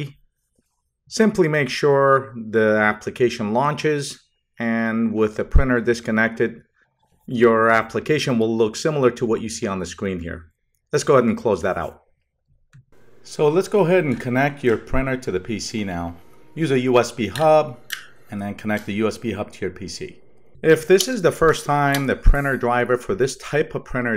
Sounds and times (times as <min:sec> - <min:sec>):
Speech: 0:00.0 - 0:00.2, 0:01.1 - 0:06.6, 0:07.3 - 0:12.0, 0:13.2 - 0:24.1.